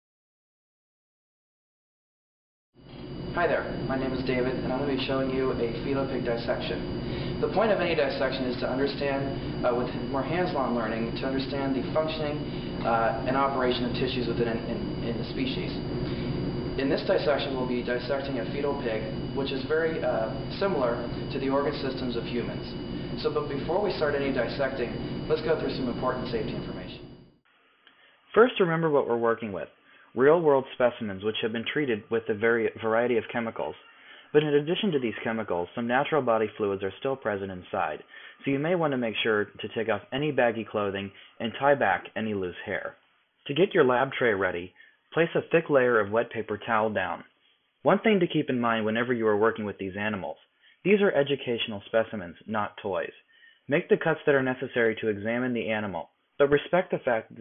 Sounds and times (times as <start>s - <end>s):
Speech: 3.4s - 15.9s, 16.8s - 27.1s, 28.3s - 47.3s, 47.9s - 57.4s.